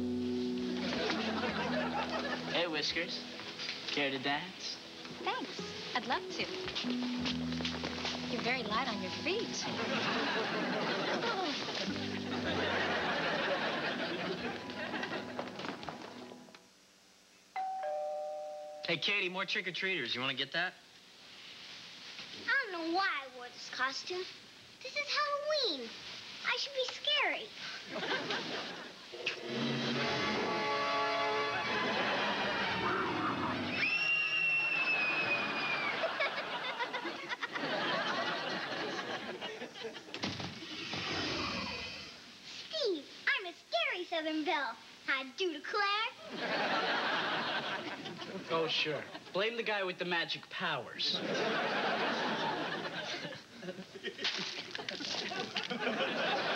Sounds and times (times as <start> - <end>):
Music: 0.0 - 10.7, 11.3 - 16.7, 29.2 - 33.7
Doorbell: 17.6 - 19.1.